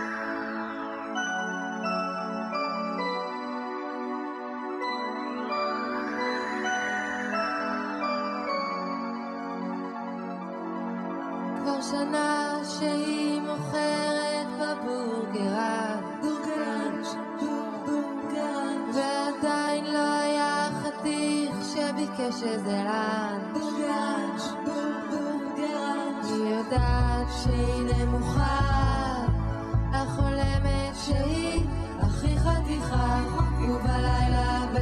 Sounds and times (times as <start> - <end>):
Music: 0.0 - 34.8.